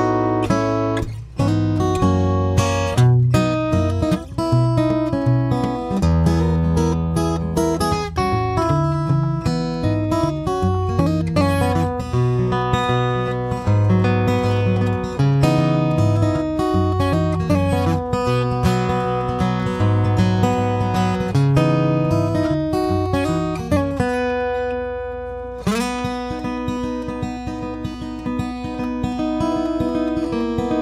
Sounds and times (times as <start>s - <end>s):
Acoustic guitar: 0.0s - 30.8s.